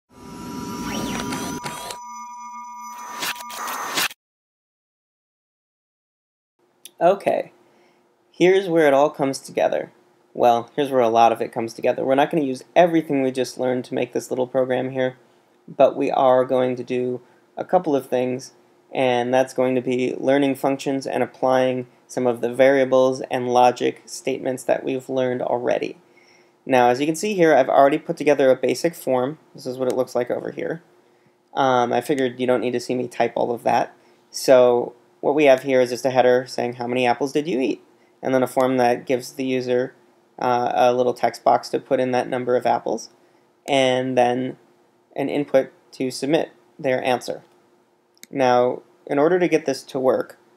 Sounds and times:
Speech: 6.9 - 7.6, 8.4 - 26.0, 26.7 - 30.9, 31.6 - 44.6, 45.2 - 47.5, 48.2 - 50.4.

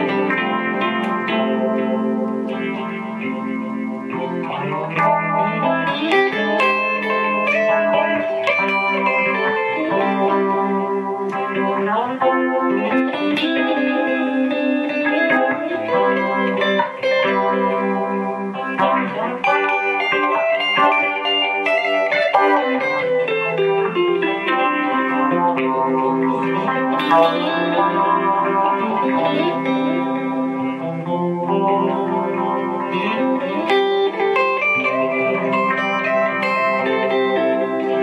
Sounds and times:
Music: 0.0 - 38.0.

